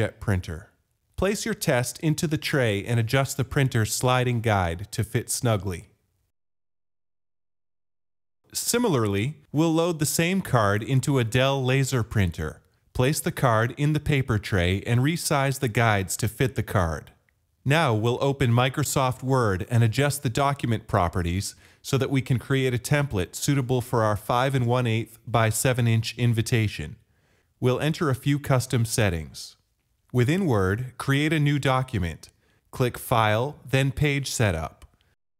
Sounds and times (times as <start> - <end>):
Speech: 0.0 - 6.0, 8.5 - 27.0, 27.6 - 34.9.